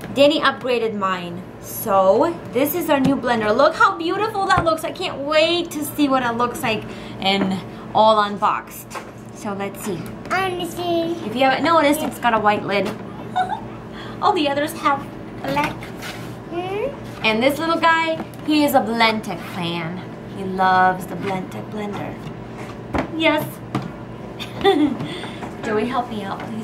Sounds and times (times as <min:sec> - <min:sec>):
Child speech, kid speaking: 0:10.2 - 0:12.2, 0:15.4 - 0:15.9, 0:16.5 - 0:17.0.